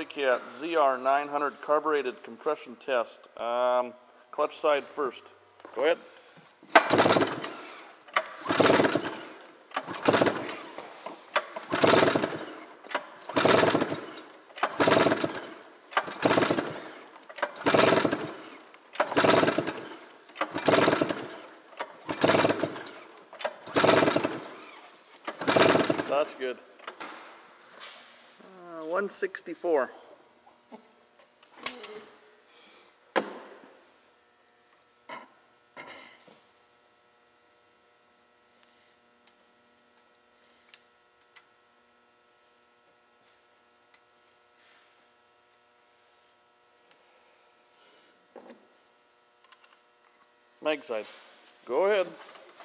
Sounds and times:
Speech: 0.0s - 6.1s, 28.5s - 30.0s, 50.6s - 52.2s.

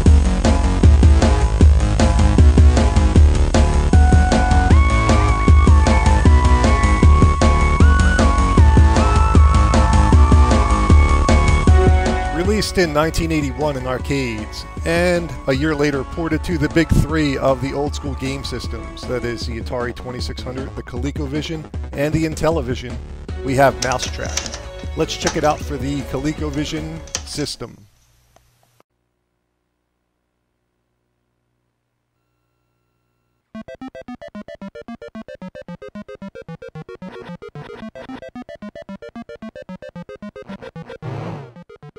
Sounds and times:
Music: 0.0s - 27.5s, 33.6s - 41.9s
Speech: 12.4s - 27.9s.

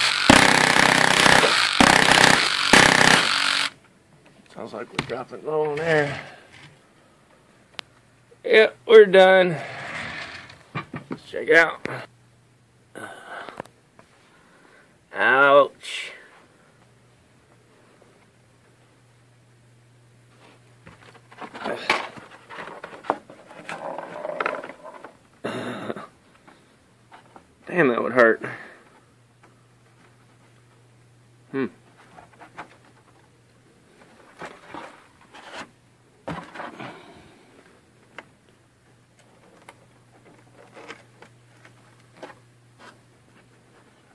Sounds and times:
Speech: 4.5s - 6.4s, 8.4s - 9.6s, 11.2s - 12.1s, 15.1s - 16.3s, 27.7s - 28.6s.

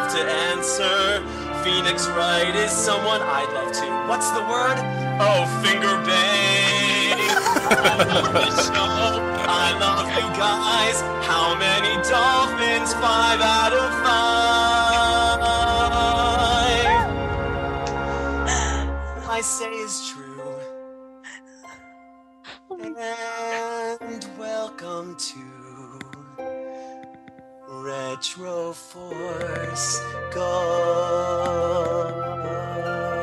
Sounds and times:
Music: 0.0s - 33.2s
Speech: 7.2s - 10.8s, 22.5s - 23.7s.

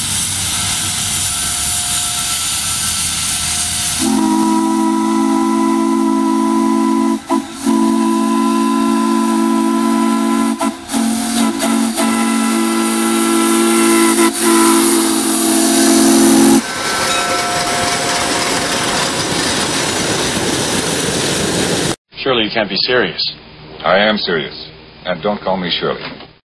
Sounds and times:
Speech: 22.2s - 26.2s.

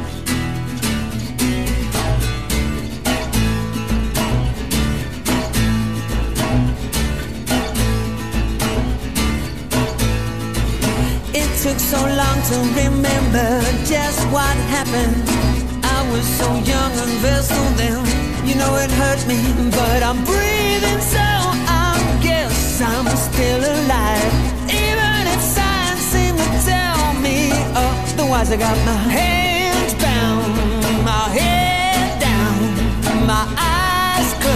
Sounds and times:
Pop music: 0.0s - 34.5s.

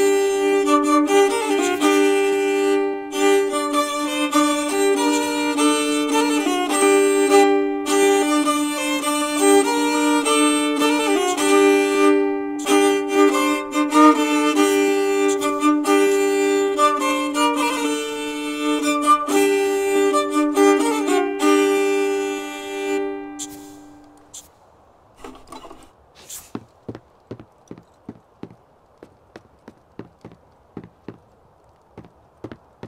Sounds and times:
Violin, fiddle: 0.0s - 24.4s.

